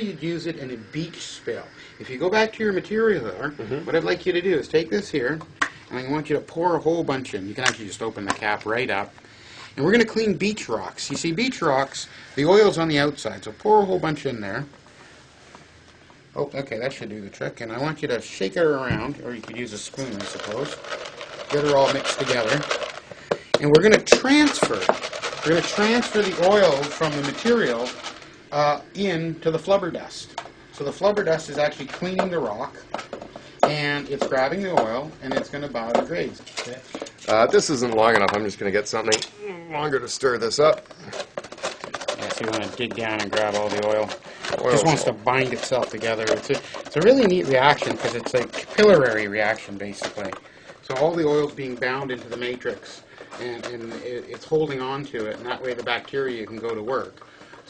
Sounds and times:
Speech: 0.0 - 9.1, 9.8 - 14.7, 16.4 - 20.8, 21.5 - 22.7, 23.6 - 32.8, 33.6 - 40.8, 42.1 - 57.2
Inside, small room: 0.0 - 57.6.

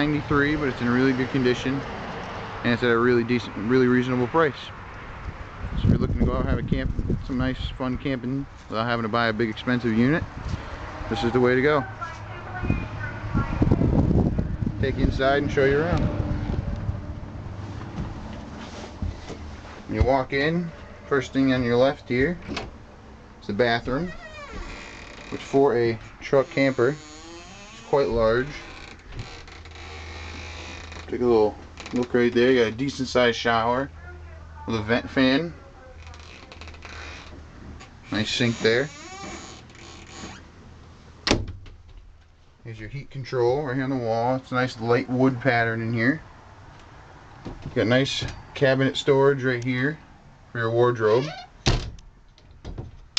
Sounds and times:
Speech: 2.7 - 4.8, 5.8 - 10.3, 11.1 - 13.8, 14.8 - 16.0, 19.9 - 22.4, 23.4 - 24.2, 25.4 - 27.0, 27.9 - 28.7, 31.1 - 36.2, 38.1 - 39.0, 42.6 - 46.2, 47.8 - 50.0, 50.6 - 51.4.

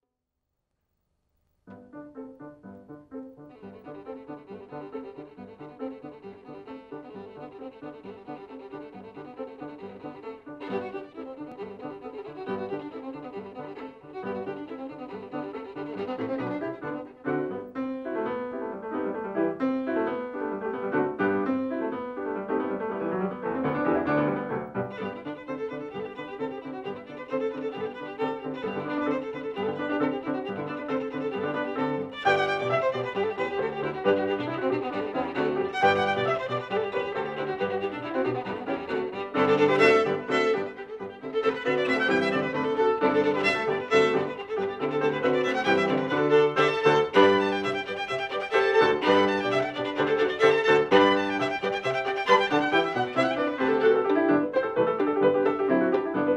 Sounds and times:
Violin, fiddle: 2.9 - 56.3.

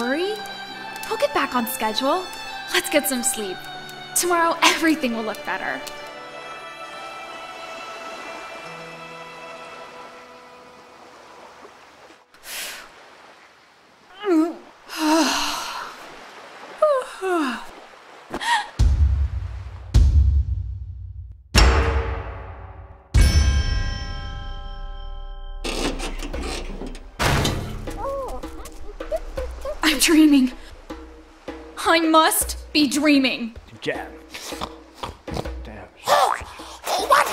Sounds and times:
Music: 0.0 - 11.4, 18.8 - 37.3
Outside, rural or natural: 0.0 - 37.3.

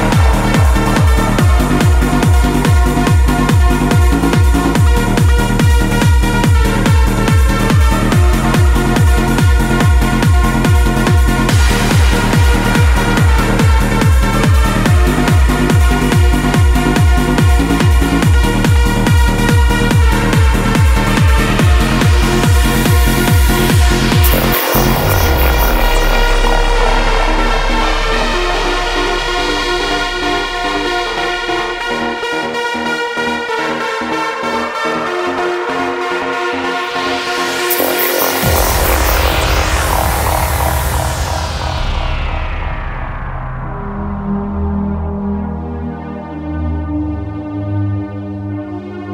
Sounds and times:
Music: 0.0 - 49.1.

